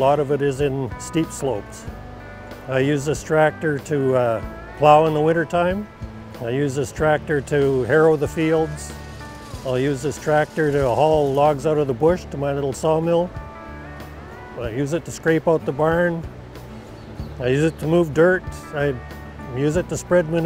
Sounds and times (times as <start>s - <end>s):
Speech: 0.0s - 1.8s, 2.7s - 5.8s, 6.4s - 8.9s, 9.6s - 13.3s, 14.6s - 16.2s, 17.4s - 20.4s
Music: 0.0s - 20.4s.